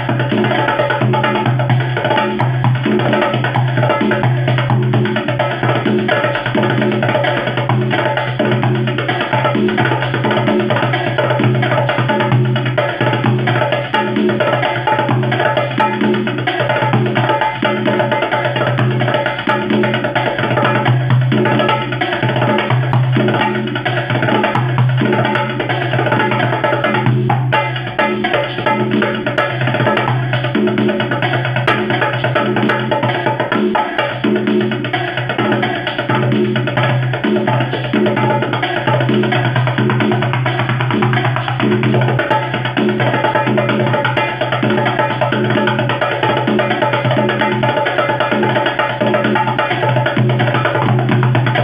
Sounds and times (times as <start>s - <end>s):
Drum: 0.0s - 51.6s
Inside, small room: 0.0s - 51.6s.